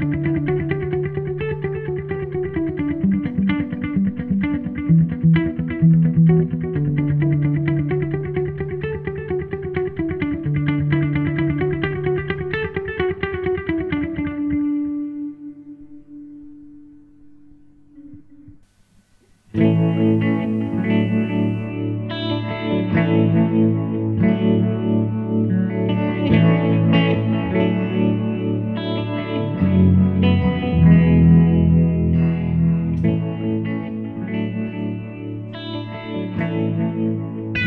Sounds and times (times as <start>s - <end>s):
Strum: 0.0s - 37.6s
Acoustic guitar: 15.6s - 37.6s.